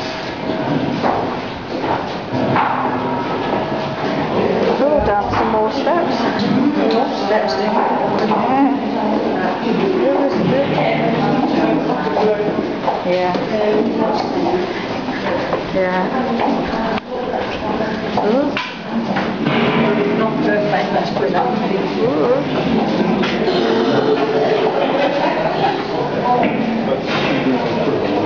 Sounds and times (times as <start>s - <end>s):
Speech: 19.9s - 22.6s.